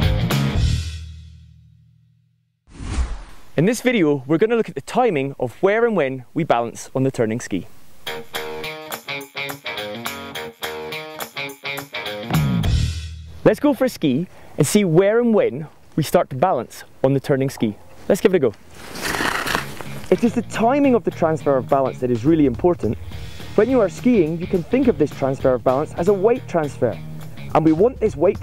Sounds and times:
Music: 0.0 - 1.8, 8.0 - 13.4, 19.8 - 28.4
Speech: 3.6 - 7.7, 13.4 - 18.6, 20.1 - 23.0, 23.6 - 28.4.

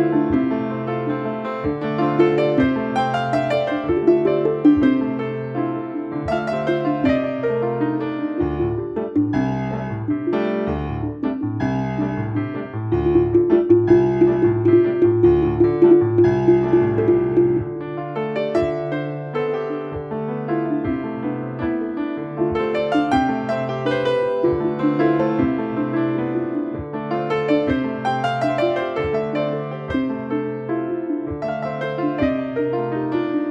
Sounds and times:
Electric piano: 0.0 - 33.5.

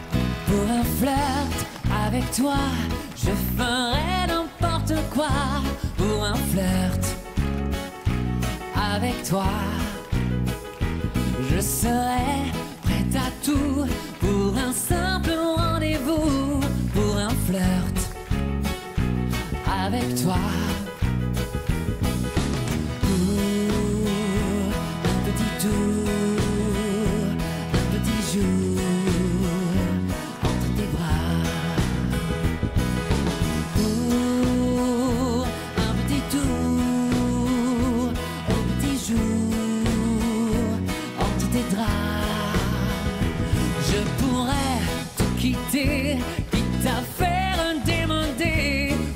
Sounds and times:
Music: 0.0 - 49.1.

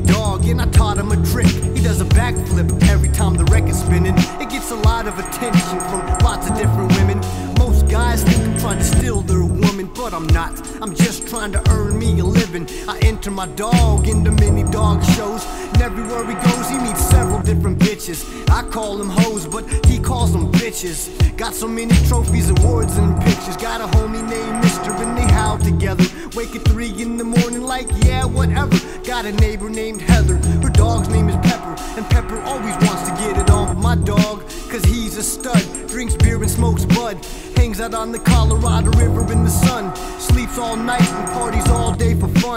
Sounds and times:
Music: 0.0 - 42.5.

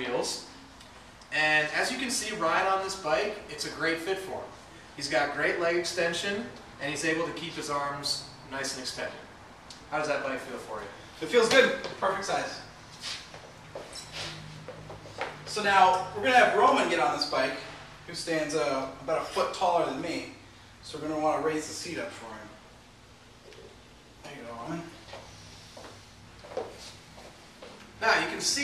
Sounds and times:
Speech: 0.0 - 0.5, 1.3 - 9.3, 9.9 - 12.7, 15.5 - 22.6, 24.2 - 25.0, 28.0 - 28.6.

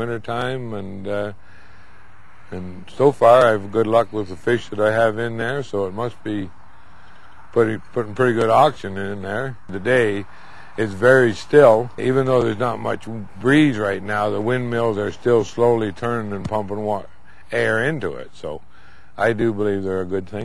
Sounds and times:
Speech: 0.0 - 1.4, 2.5 - 6.5, 7.5 - 18.6, 19.2 - 20.4.

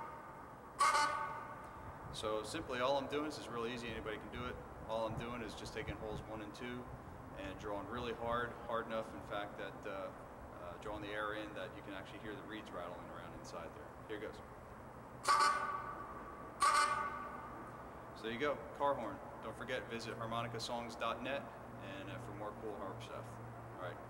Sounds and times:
Speech: 2.2 - 14.4, 18.2 - 24.0.

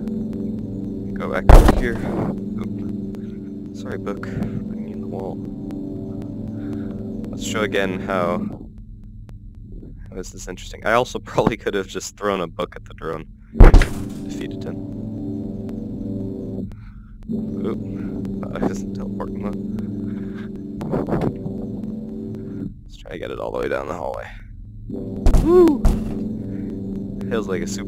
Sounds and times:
Pulse: 0.0 - 10.1, 13.3 - 22.9, 24.6 - 27.8
Music: 0.0 - 27.8
Speech: 1.2 - 2.8, 3.8 - 5.4, 7.4 - 8.6, 9.8 - 13.2, 14.3 - 14.8, 17.6 - 17.8, 18.4 - 19.6, 22.9 - 24.4, 27.3 - 27.8.

